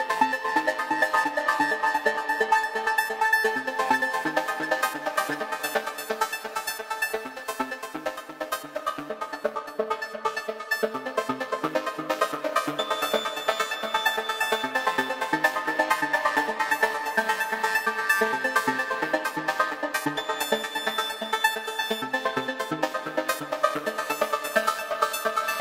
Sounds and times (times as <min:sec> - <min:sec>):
Music: 0:00.0 - 0:25.6.